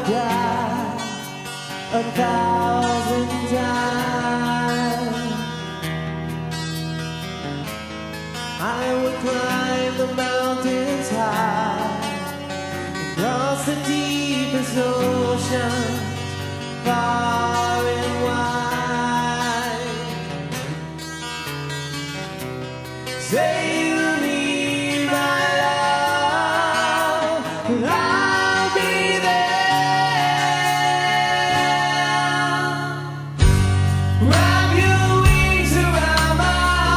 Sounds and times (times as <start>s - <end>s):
Music: 0.0s - 36.9s.